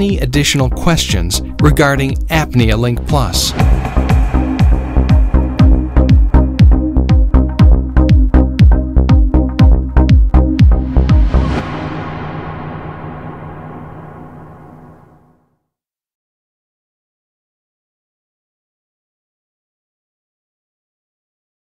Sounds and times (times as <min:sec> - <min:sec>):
Music: 0:00.0 - 0:15.8.